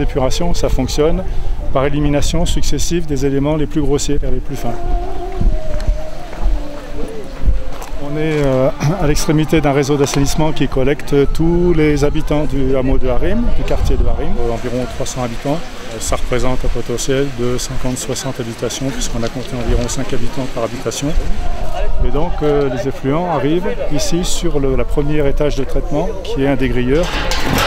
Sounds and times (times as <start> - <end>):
Speech: 0.0 - 4.8, 8.0 - 27.6.